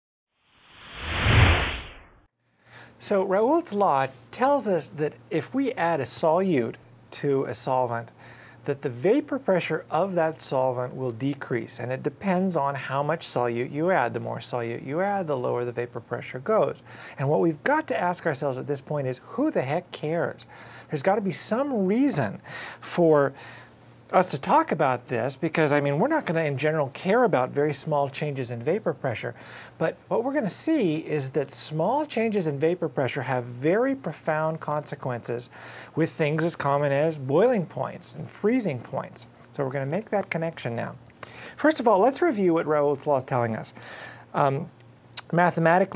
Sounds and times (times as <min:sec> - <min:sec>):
Speech: 0:03.0 - 0:23.4, 0:24.1 - 0:41.0, 0:41.6 - 0:45.9.